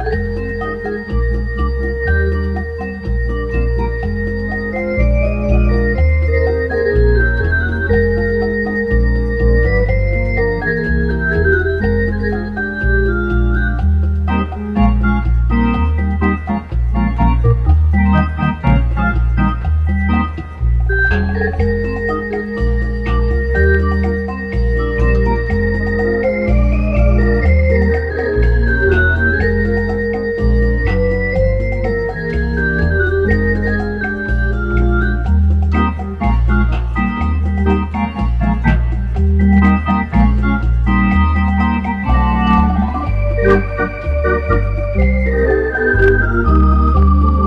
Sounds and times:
Music: 0:00.0 - 0:47.4.

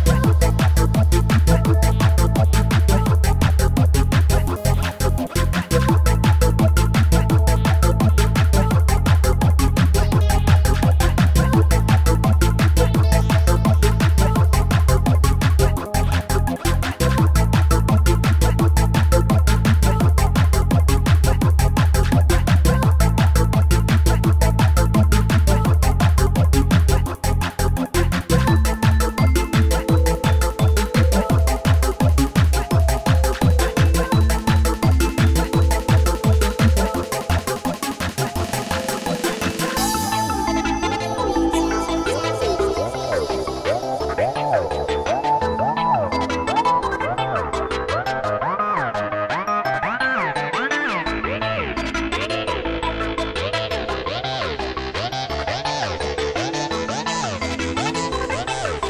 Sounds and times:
Trance music: 0:00.0 - 0:58.8.

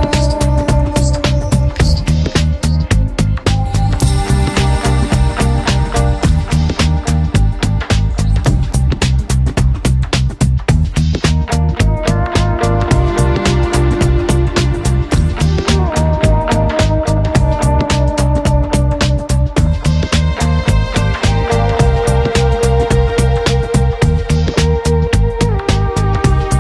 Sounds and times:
Music: 0:00.0 - 0:26.6.

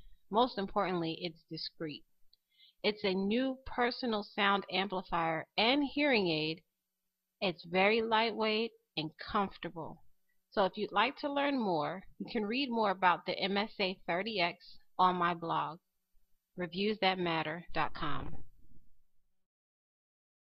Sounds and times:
Speech: 0:00.4 - 0:02.0, 0:02.9 - 0:06.6, 0:07.4 - 0:10.0, 0:10.6 - 0:15.8, 0:16.6 - 0:18.4.

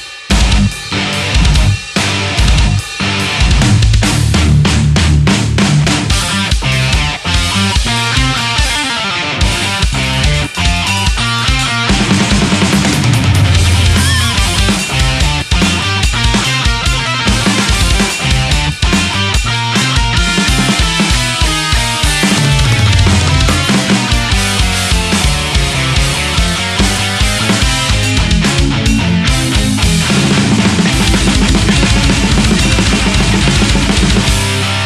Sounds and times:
Heavy metal: 0:00.0 - 0:34.8.

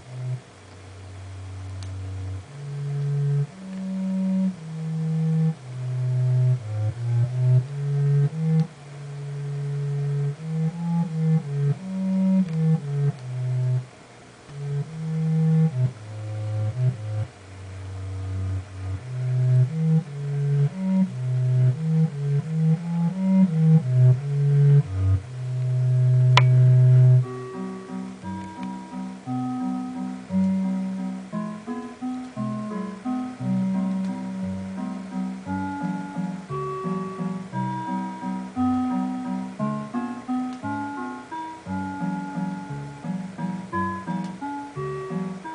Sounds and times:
Music: 0:00.0 - 0:45.5.

